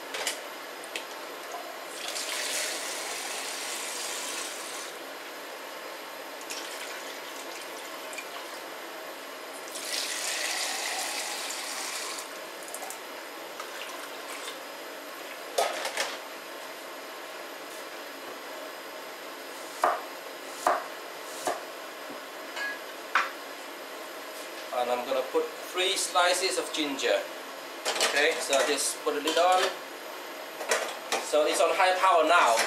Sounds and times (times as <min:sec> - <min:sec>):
Water tap, faucet: 0:01.9 - 0:04.9, 0:06.5 - 0:08.6, 0:09.7 - 0:12.9
Sink (filling or washing): 0:02.0 - 0:04.9, 0:09.7 - 0:12.3.